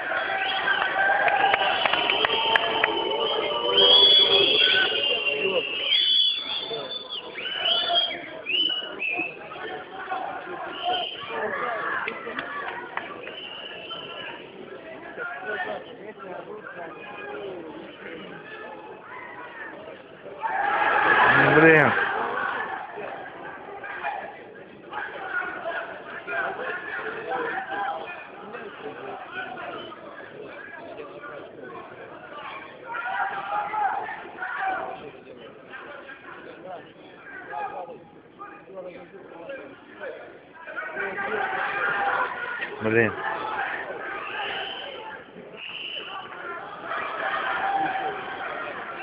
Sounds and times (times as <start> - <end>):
Inside, public space: 0.0 - 49.0.